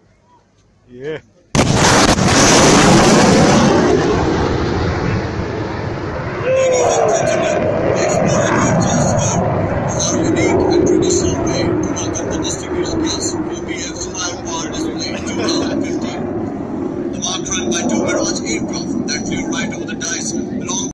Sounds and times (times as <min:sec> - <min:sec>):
Speech: 0:00.3 - 0:01.4, 0:06.5 - 0:16.2, 0:17.2 - 0:20.9.